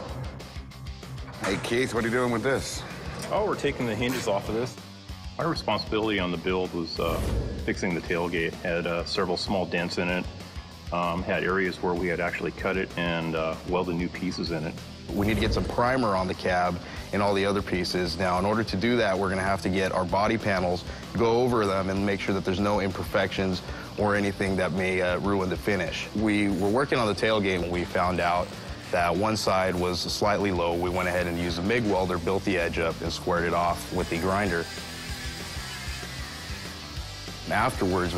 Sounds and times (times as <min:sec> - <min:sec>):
Music: 0:00.0 - 0:38.1
Speech: 0:01.4 - 0:04.8, 0:05.4 - 0:10.3, 0:10.9 - 0:34.7, 0:37.5 - 0:38.1.